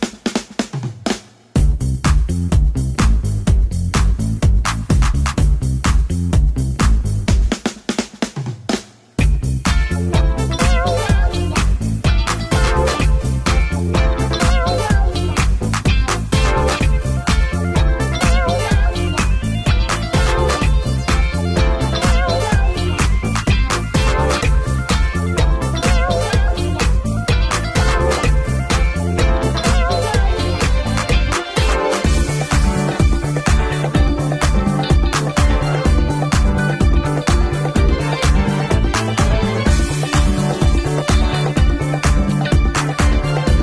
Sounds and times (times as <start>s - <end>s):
Music: 0.0s - 43.6s.